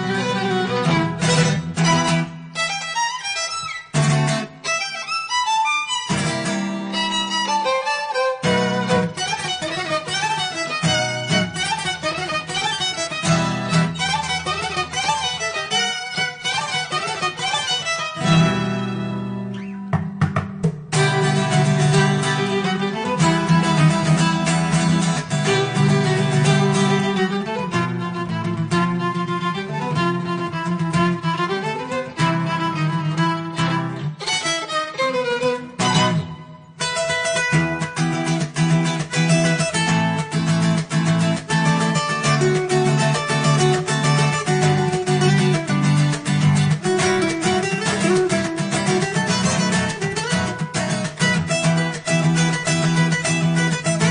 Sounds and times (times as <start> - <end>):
Music: 0.0 - 54.1.